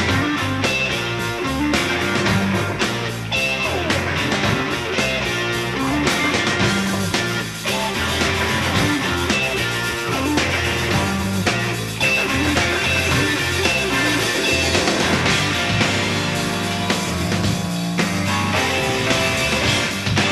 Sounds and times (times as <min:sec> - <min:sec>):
Music: 0:00.0 - 0:20.3.